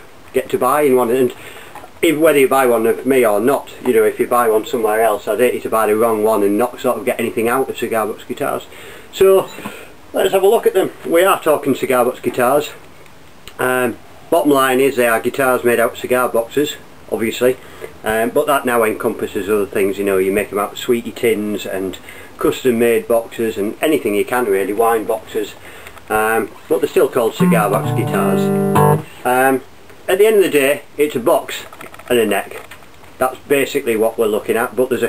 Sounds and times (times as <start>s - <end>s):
Speech: 0.3s - 1.4s, 2.0s - 12.8s, 13.5s - 28.5s, 29.2s - 35.0s.